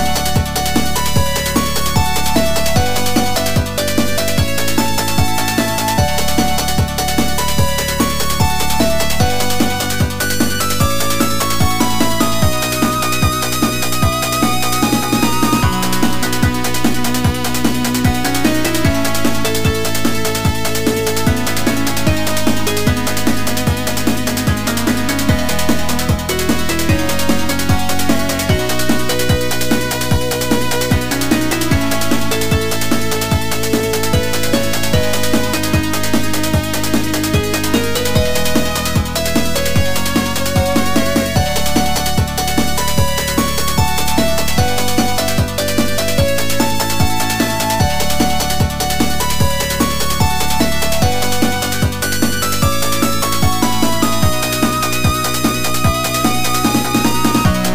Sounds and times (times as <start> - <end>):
Music: 0.0 - 57.7.